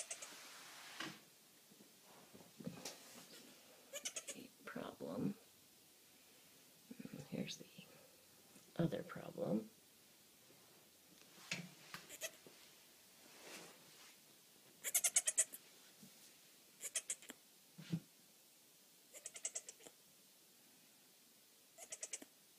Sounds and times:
Goat: 0.0 - 0.3, 12.1 - 12.4, 14.8 - 15.6, 16.8 - 17.4, 19.1 - 20.0
Domestic animals, pets: 0.0 - 0.4, 3.9 - 4.4, 12.1 - 12.4, 14.8 - 15.6, 16.8 - 17.4, 19.1 - 20.0, 21.8 - 22.3.

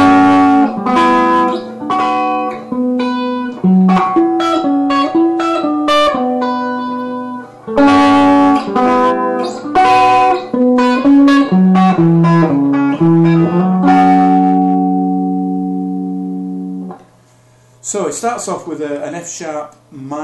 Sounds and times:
Guitar: 0.0 - 17.8.

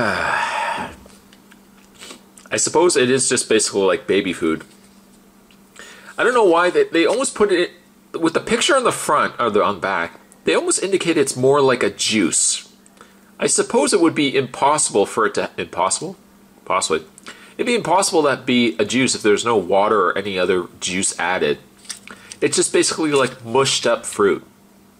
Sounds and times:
Inside, small room: 0.0 - 24.9
Speech: 2.5 - 4.7, 6.2 - 12.8, 13.4 - 21.7, 22.4 - 24.5.

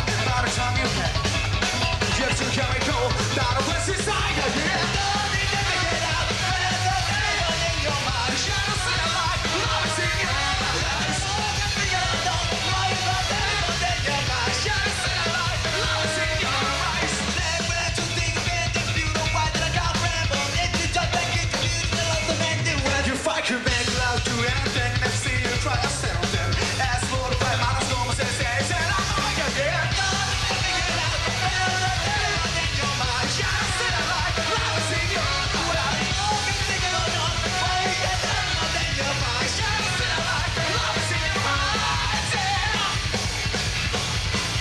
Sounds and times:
Music: 0.0 - 44.6.

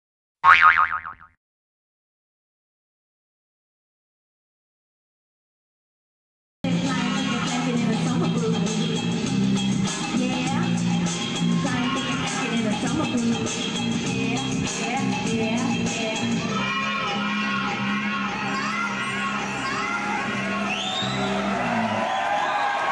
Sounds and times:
Music: 6.6 - 22.9
Inside, large room or hall: 6.7 - 22.9.

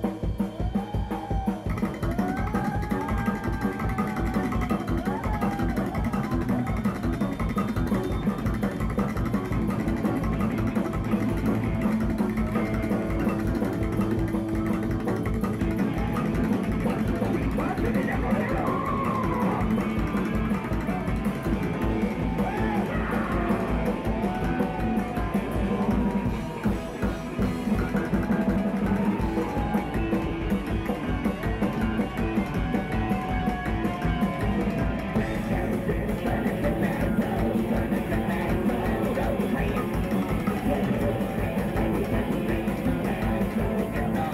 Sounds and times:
Music: 0.0 - 44.3
Speech: 16.8 - 19.8.

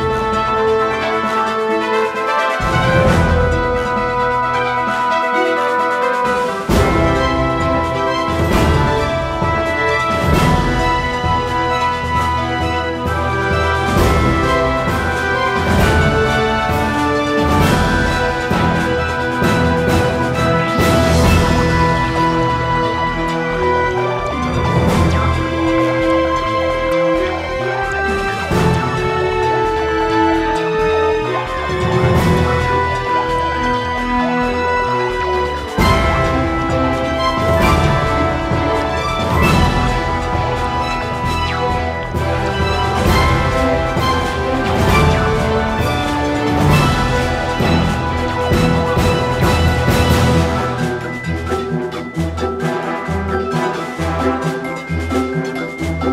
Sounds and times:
Music: 0.0 - 56.1.

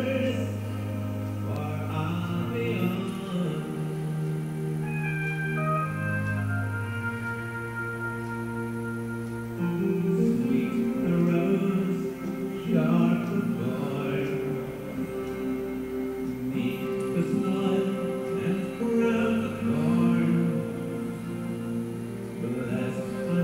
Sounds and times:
Music: 0.0 - 23.4.

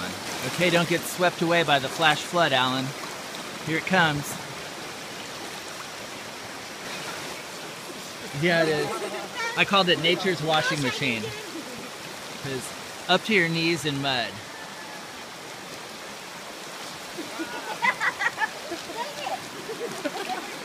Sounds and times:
Stream: 0.0 - 20.6.

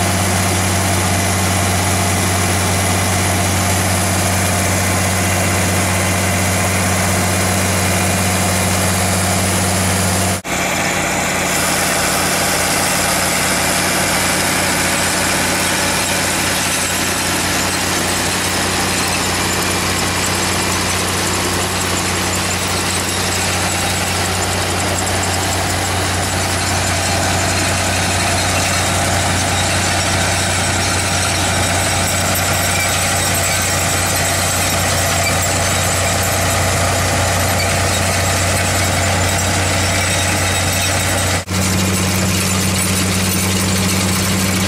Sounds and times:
Outside, rural or natural: 0.0 - 44.6
Vehicle: 0.0 - 44.6
Vibration: 0.0 - 44.6.

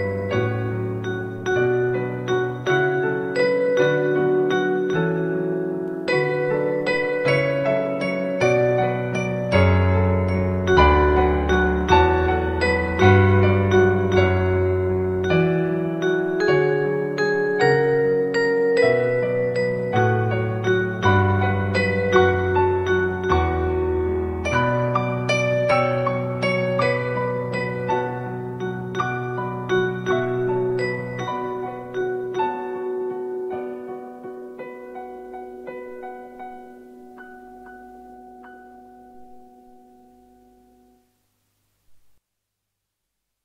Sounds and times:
Lullaby: 0.0 - 41.2.

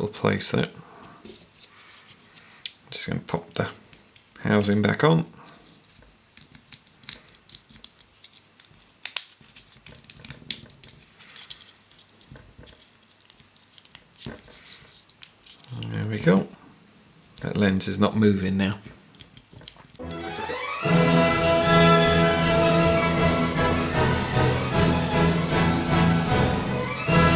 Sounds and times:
Speech: 0.0 - 0.8, 2.9 - 3.8, 4.4 - 5.4, 15.7 - 16.6, 17.4 - 19.0
Inside, small room: 0.0 - 27.3.

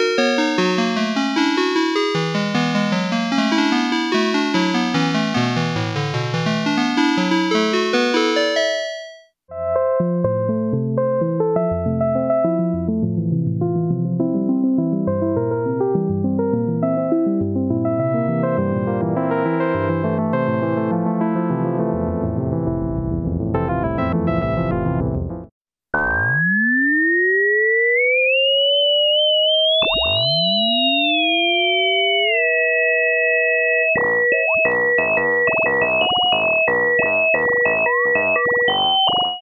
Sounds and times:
Music: 0.0 - 25.5, 33.6 - 39.4.

